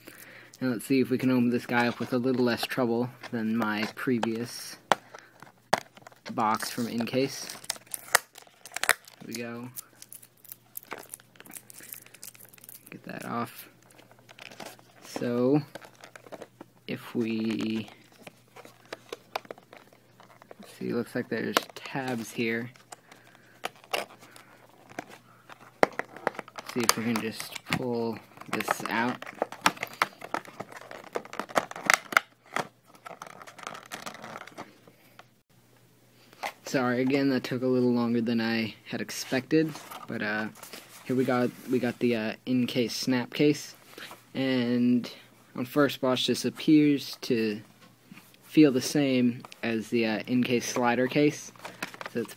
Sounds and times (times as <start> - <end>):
Speech: 0.6 - 4.8, 6.3 - 7.6, 9.2 - 9.8, 12.9 - 13.7, 15.1 - 15.7, 16.9 - 18.0, 20.6 - 22.8, 26.7 - 29.2, 36.6 - 47.7, 48.5 - 51.5, 52.1 - 52.3.